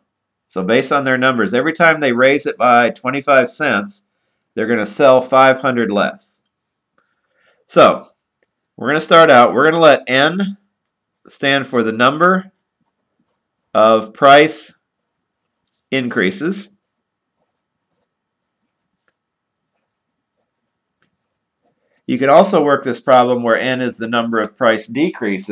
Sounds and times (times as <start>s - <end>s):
Speech: 0.5s - 6.4s, 7.7s - 8.1s, 8.8s - 10.6s, 11.3s - 12.6s, 13.7s - 14.8s, 15.9s - 16.8s, 22.1s - 25.5s.